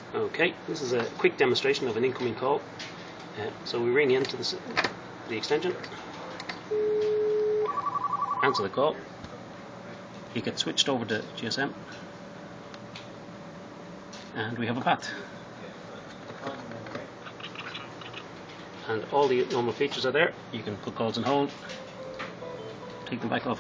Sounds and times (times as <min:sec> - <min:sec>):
Speech: 0:00.1 - 0:02.6, 0:03.4 - 0:06.0, 0:08.4 - 0:09.1, 0:10.3 - 0:11.8, 0:14.4 - 0:15.8, 0:18.8 - 0:21.6, 0:23.1 - 0:23.6.